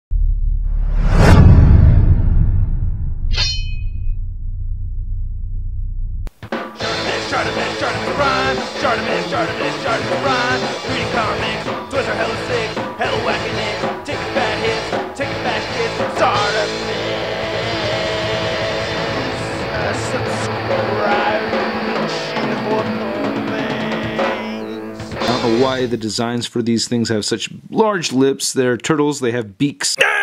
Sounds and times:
Music: 6.3 - 26.0.

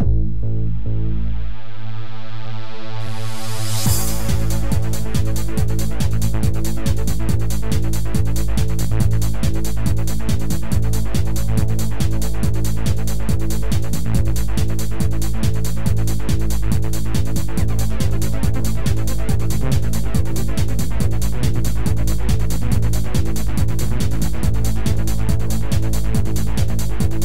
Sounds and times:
Techno: 0.0 - 27.2.

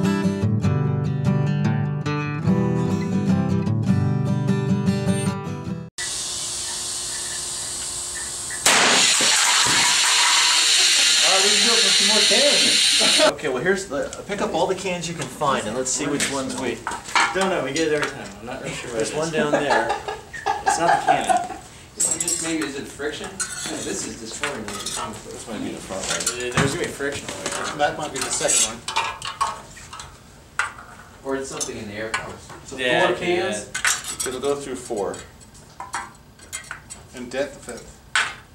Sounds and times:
Speech: 11.2 - 19.9, 20.7 - 28.9, 31.2 - 35.3, 37.1 - 37.9.

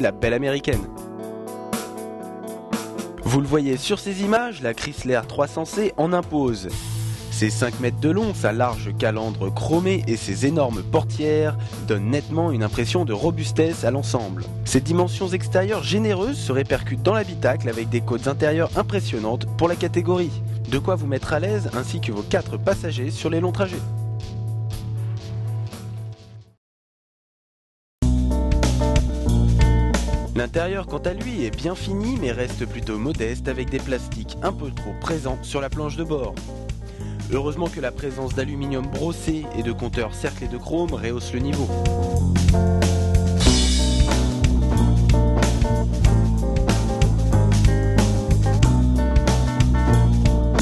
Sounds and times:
Speech: 0.0 - 0.9, 3.2 - 23.9, 30.4 - 36.4, 37.2 - 41.8
Music: 0.0 - 26.6, 28.0 - 50.6.

